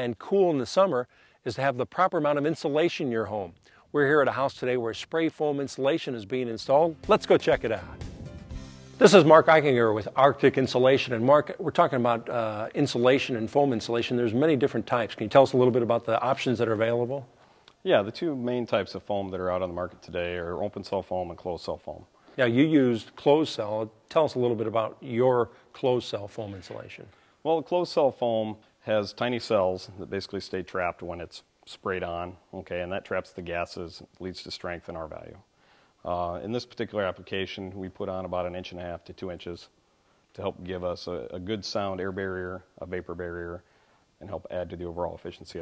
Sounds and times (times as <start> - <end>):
Speech: 0.0 - 8.0, 9.0 - 39.8, 40.4 - 43.6, 44.2 - 45.6.